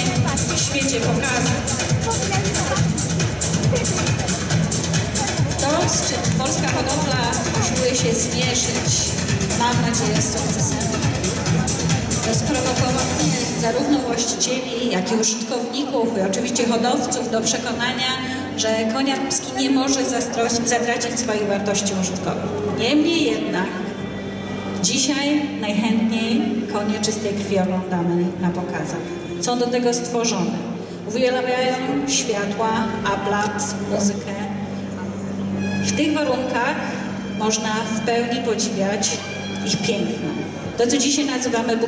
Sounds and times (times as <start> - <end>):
Speech: 0.0 - 23.8, 24.8 - 34.6, 35.8 - 41.8.